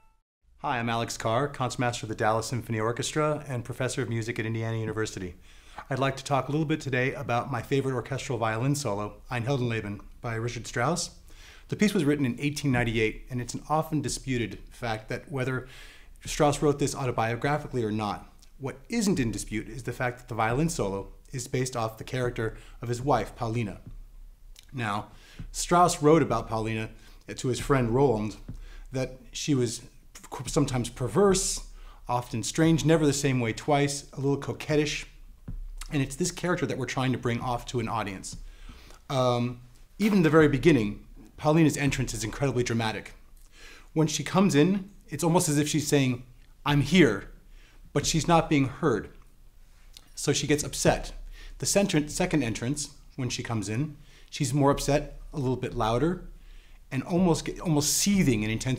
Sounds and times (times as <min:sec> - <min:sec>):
Speech: 0:00.6 - 0:23.9, 0:24.6 - 0:35.2, 0:35.8 - 0:38.4, 0:39.1 - 0:43.2, 0:44.0 - 0:49.2, 0:50.2 - 0:56.3, 0:56.9 - 0:58.7.